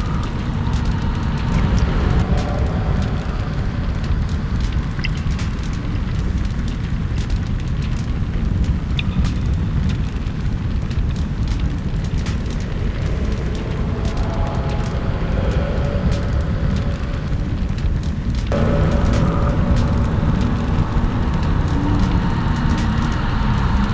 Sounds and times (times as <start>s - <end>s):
Music: 0.0s - 23.9s.